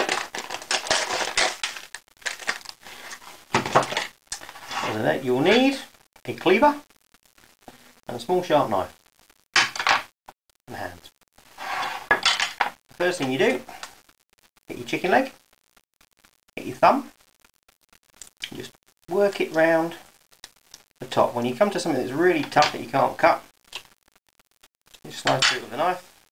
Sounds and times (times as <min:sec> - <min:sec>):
Speech: 0:04.8 - 0:06.8, 0:08.1 - 0:09.0, 0:10.7 - 0:11.1, 0:13.0 - 0:13.7, 0:14.7 - 0:15.4, 0:16.6 - 0:17.1, 0:18.5 - 0:20.0, 0:21.0 - 0:23.5, 0:25.0 - 0:26.1.